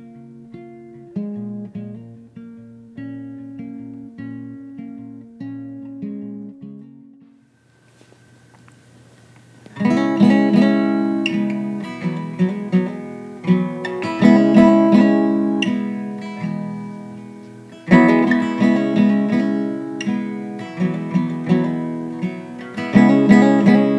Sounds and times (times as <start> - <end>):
Music: 0.0 - 7.5, 9.7 - 23.9.